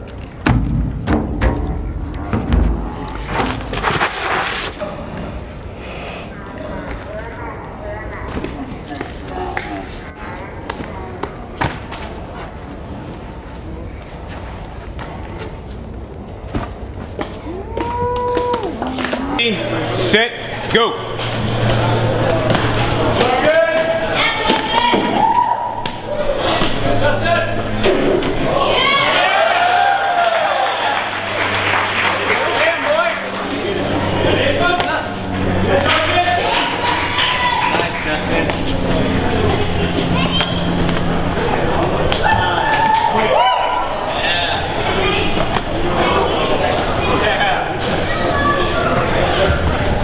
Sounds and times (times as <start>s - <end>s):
Outside, urban or manmade: 0.0s - 50.0s.